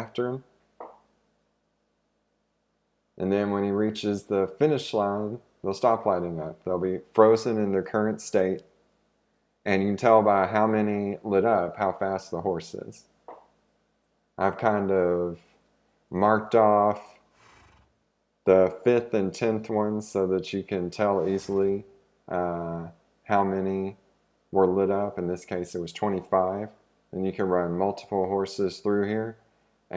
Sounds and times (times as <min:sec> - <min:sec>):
Speech: 0:00.0 - 0:00.5, 0:03.2 - 0:08.7, 0:09.7 - 0:13.1, 0:14.4 - 0:15.5, 0:16.1 - 0:17.2, 0:18.5 - 0:29.9.